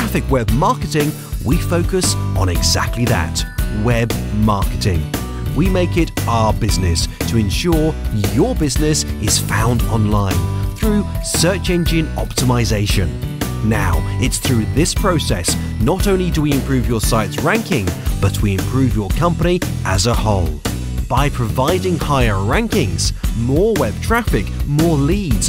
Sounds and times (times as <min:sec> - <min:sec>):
Music: 0:00.0 - 0:25.4
Speech: 0:00.0 - 0:25.4.